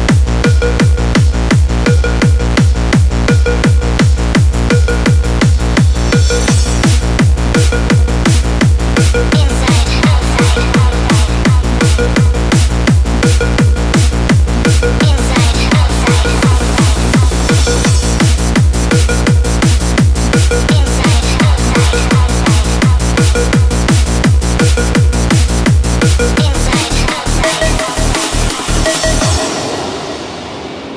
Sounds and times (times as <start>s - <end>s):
Music: 0.0s - 30.9s.